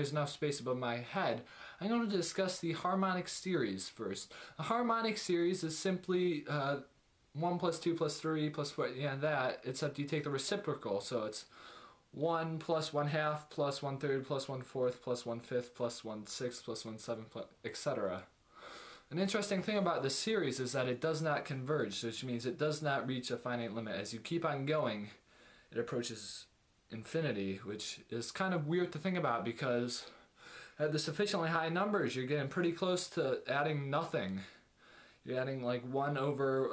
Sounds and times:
Speech: 0.0 - 11.5, 12.2 - 18.3, 19.1 - 30.2, 30.8 - 34.6, 35.2 - 36.7.

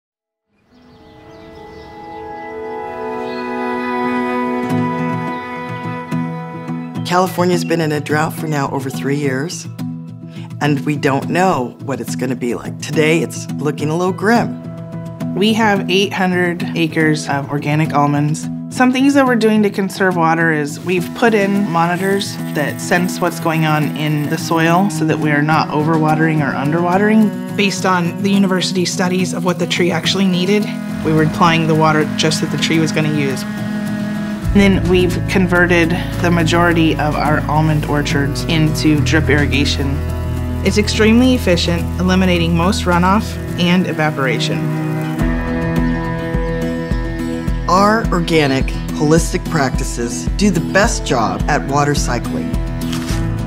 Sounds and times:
Music: 0.5 - 53.4
Speech: 7.1 - 9.7, 10.5 - 14.6, 15.4 - 33.5, 34.5 - 40.0, 40.7 - 44.7, 47.7 - 52.6.

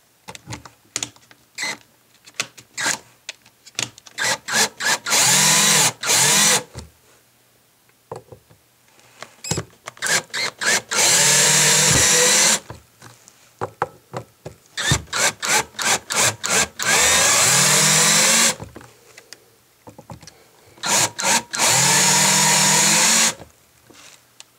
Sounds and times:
Power tool: 4.2 - 6.7, 10.0 - 12.7, 14.8 - 18.6, 20.8 - 23.4.

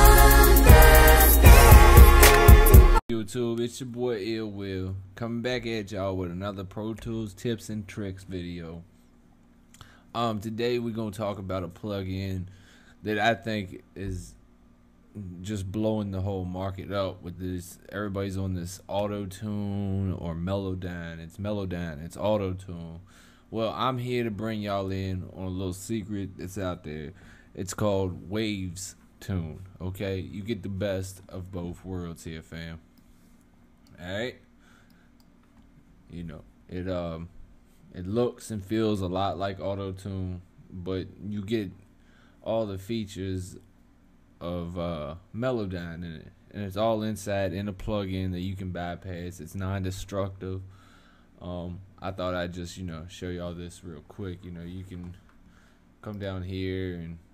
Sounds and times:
Speech: 3.1 - 8.9, 10.2 - 14.4, 15.2 - 32.8, 33.9 - 34.4, 36.1 - 37.3, 37.9 - 41.8, 42.4 - 43.7, 44.4 - 50.7, 51.4 - 55.2, 56.0 - 57.3.

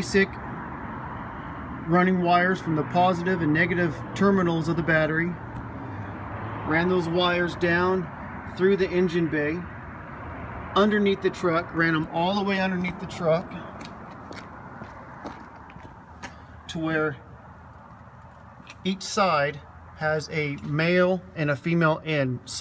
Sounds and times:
Speech: 0.0 - 0.4, 1.9 - 5.4, 6.7 - 9.7, 10.8 - 13.7, 16.7 - 17.2, 18.8 - 22.6.

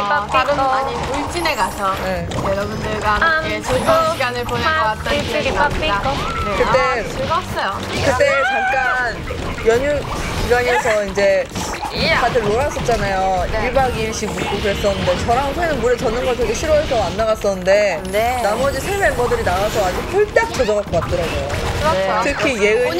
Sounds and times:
Music: 0.0 - 22.9.

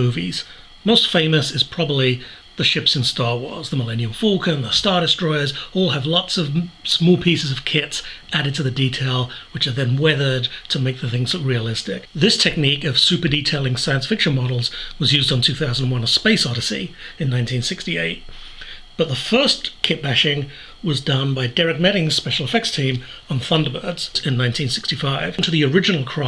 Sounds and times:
Speech: 0.0 - 18.3, 19.0 - 26.2.

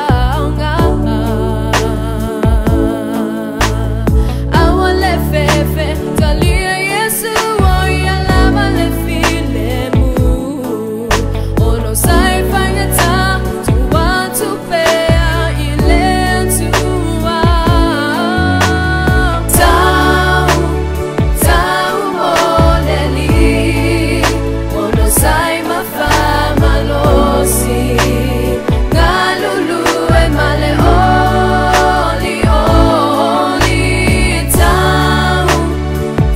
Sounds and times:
Rhythm and blues: 0.0 - 36.3.

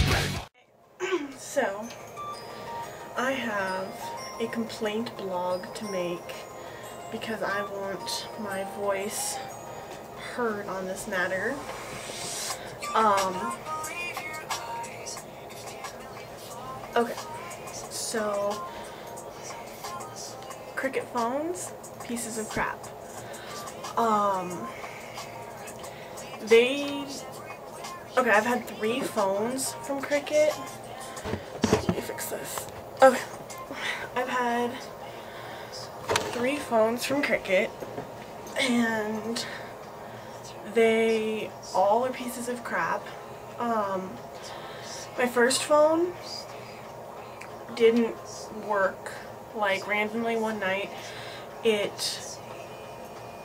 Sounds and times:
Music: 0.0 - 53.4.

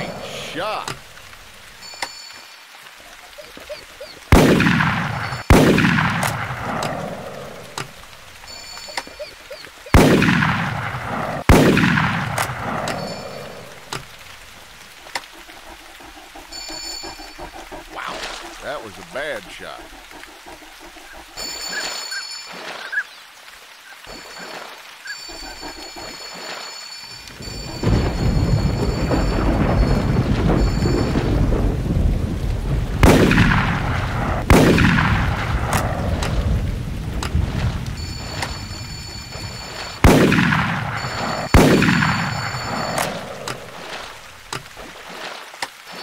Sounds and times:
Rain: 0.0 - 46.0
Gunshot, gunfire: 4.4 - 6.4, 10.0 - 10.7, 11.5 - 12.3, 33.0 - 33.8, 34.5 - 35.2, 40.0 - 40.8, 41.5 - 42.3
Thunder: 27.6 - 38.8.

